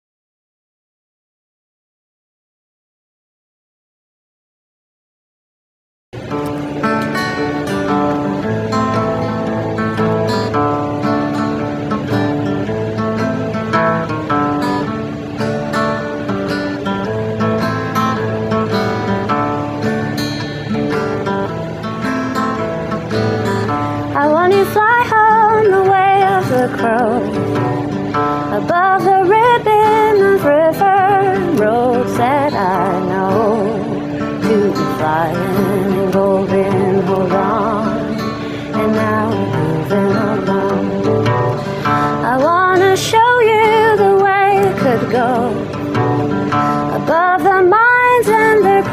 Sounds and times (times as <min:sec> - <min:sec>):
Music: 0:06.2 - 0:48.9.